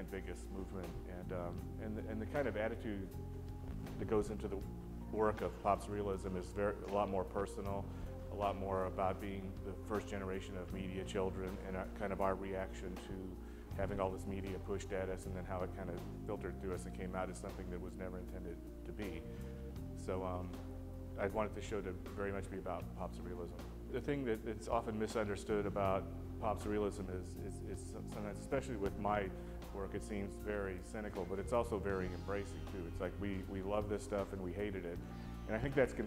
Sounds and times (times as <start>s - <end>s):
Speech: 0.0s - 3.2s, 3.9s - 19.3s, 20.0s - 20.6s, 21.2s - 36.0s
Music: 0.0s - 36.0s.